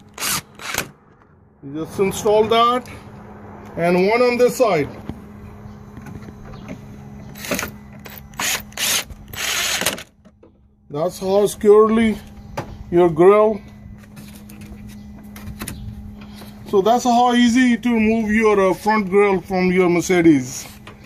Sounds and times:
Vehicle: 0:00.0 - 0:21.0.

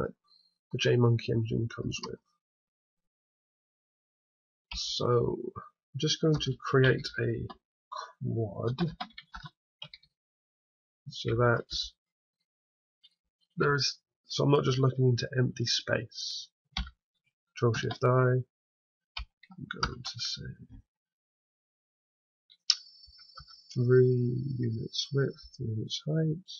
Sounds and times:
Speech: 0:00.8 - 0:02.2, 0:04.8 - 0:09.0, 0:11.1 - 0:12.0, 0:13.6 - 0:16.5, 0:17.6 - 0:18.5, 0:19.6 - 0:20.6, 0:23.7 - 0:26.5.

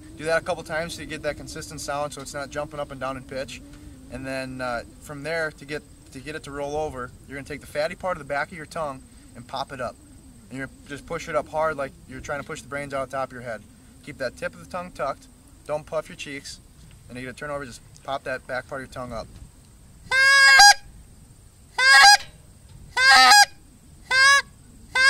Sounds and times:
Speech: 0:00.2 - 0:19.3.

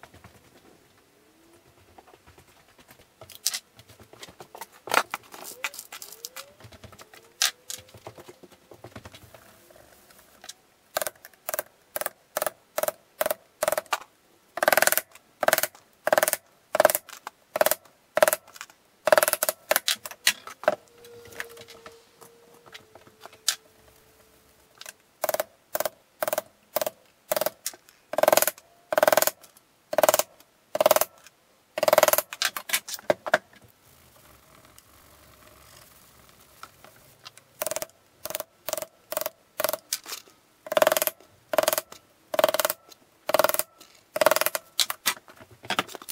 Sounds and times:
Wood: 0:14.6 - 0:46.1.

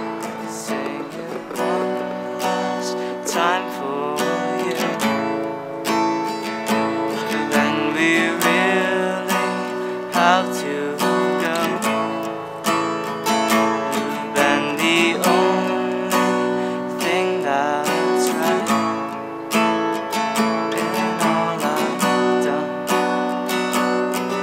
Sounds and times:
Music: 0:00.0 - 0:24.4.

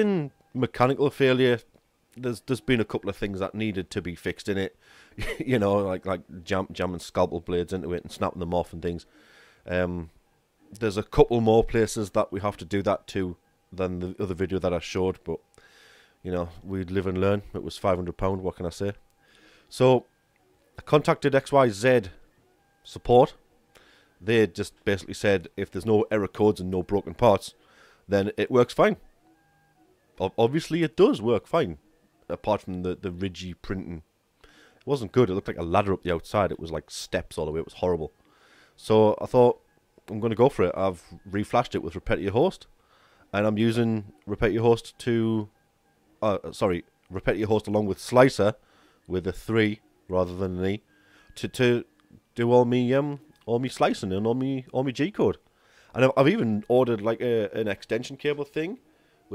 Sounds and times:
Speech: 0:00.0 - 0:09.1, 0:09.7 - 0:10.1, 0:10.8 - 0:15.4, 0:16.2 - 0:19.0, 0:19.7 - 0:20.1, 0:20.8 - 0:22.2, 0:22.9 - 0:23.4, 0:24.2 - 0:27.5, 0:28.1 - 0:29.0, 0:30.2 - 0:34.0, 0:34.9 - 0:38.1, 0:38.8 - 0:42.7, 0:43.3 - 0:45.5, 0:46.2 - 0:50.8, 0:51.4 - 0:55.4, 0:56.0 - 0:59.3.

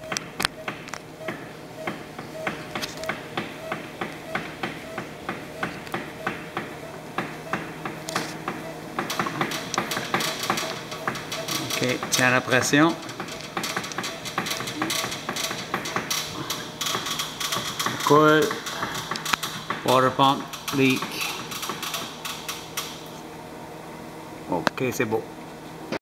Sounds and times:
Speech: 0:11.6 - 0:13.0, 0:19.9 - 0:21.2, 0:24.5 - 0:25.3.

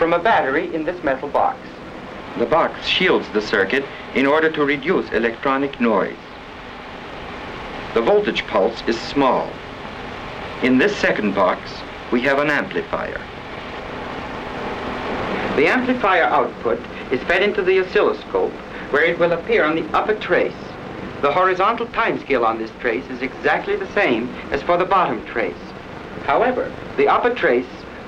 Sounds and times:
Speech: 0:00.0 - 0:01.8, 0:02.4 - 0:06.3, 0:07.9 - 0:09.6, 0:10.6 - 0:13.3, 0:15.4 - 0:27.9.

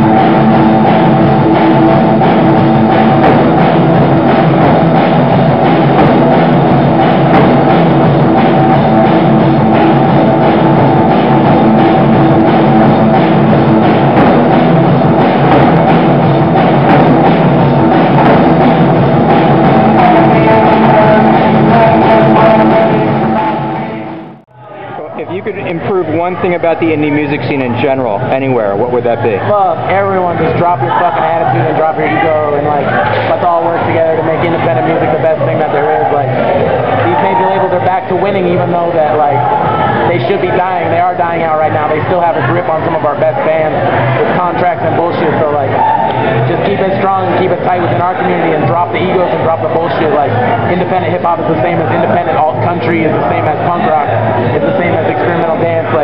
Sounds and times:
Punk rock: 0:00.0 - 0:24.4.

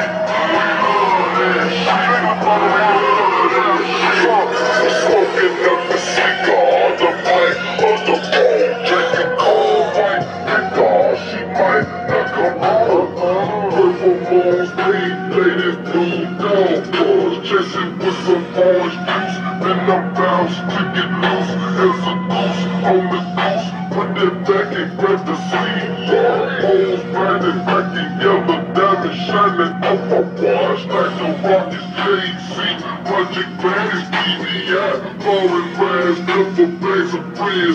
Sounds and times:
Music: 0:00.0 - 0:37.7.

